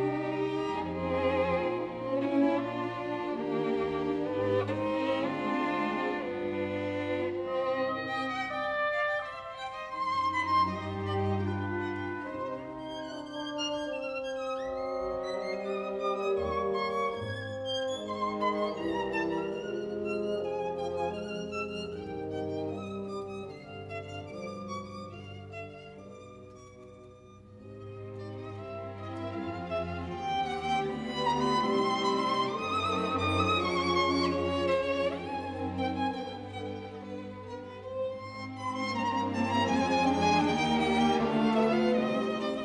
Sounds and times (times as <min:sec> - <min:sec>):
Violin, fiddle: 0:00.0 - 0:42.6.